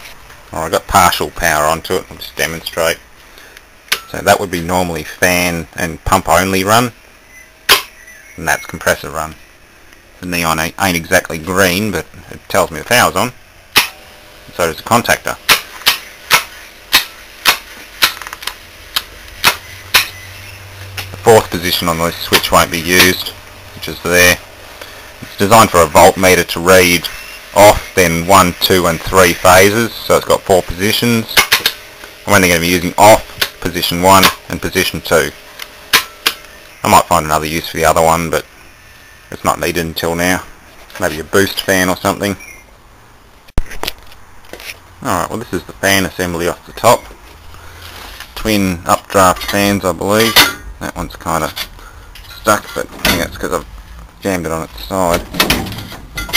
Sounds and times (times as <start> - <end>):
Speech: 0.5 - 3.0, 4.1 - 7.0, 8.4 - 9.4, 10.2 - 13.4, 14.5 - 15.4, 21.2 - 24.4, 25.2 - 31.5, 32.3 - 35.4, 36.8 - 38.5, 39.3 - 42.4, 45.0 - 47.1, 48.4 - 51.7, 52.4 - 55.3.